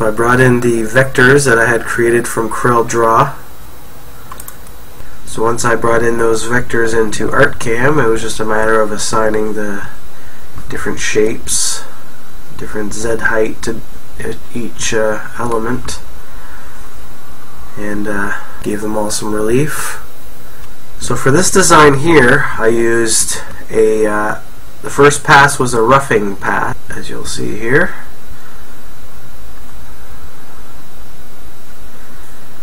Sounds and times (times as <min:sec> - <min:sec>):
Speech: 0:00.0 - 0:03.4, 0:05.3 - 0:10.0, 0:10.7 - 0:12.0, 0:12.6 - 0:16.1, 0:17.8 - 0:20.1, 0:21.0 - 0:28.1.